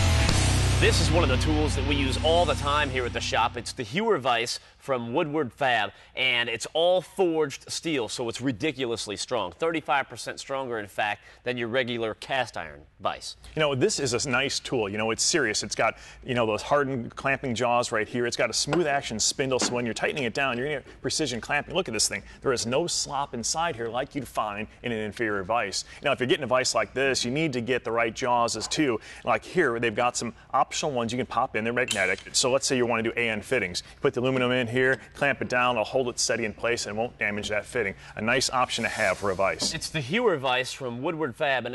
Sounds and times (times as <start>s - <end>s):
Speech: 0.8s - 41.7s.